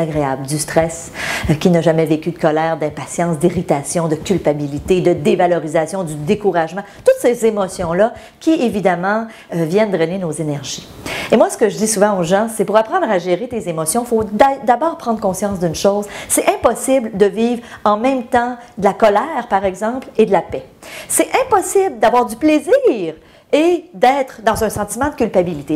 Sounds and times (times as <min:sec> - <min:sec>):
Speech: 0:00.0 - 0:25.7.